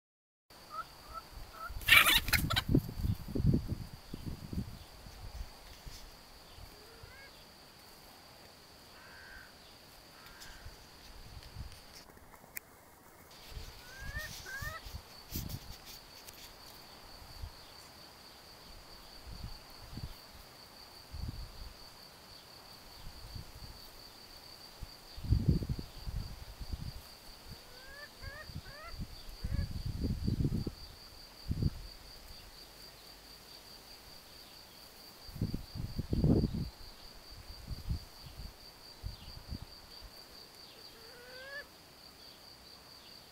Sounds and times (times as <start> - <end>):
Bird: 0.7 - 2.7, 13.4 - 15.0
Chicken, rooster: 0.7 - 2.8, 13.5 - 15.0, 27.6 - 29.7, 40.8 - 41.7.